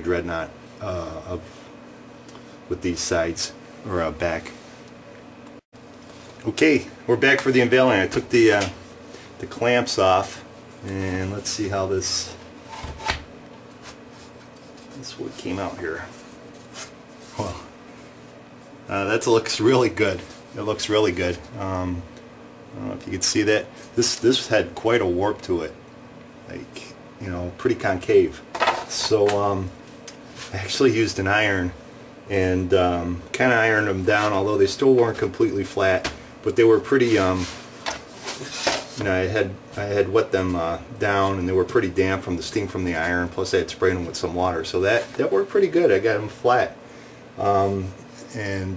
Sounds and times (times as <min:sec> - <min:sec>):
Speech: 0:00.0 - 0:01.5, 0:02.7 - 0:04.6, 0:06.4 - 0:08.8, 0:09.4 - 0:12.4, 0:14.9 - 0:16.2, 0:17.4 - 0:17.7, 0:18.9 - 0:22.1, 0:22.7 - 0:25.8, 0:26.5 - 0:29.8, 0:30.5 - 0:37.6, 0:39.0 - 0:46.8, 0:47.4 - 0:48.7
Inside, small room: 0:00.0 - 0:48.7.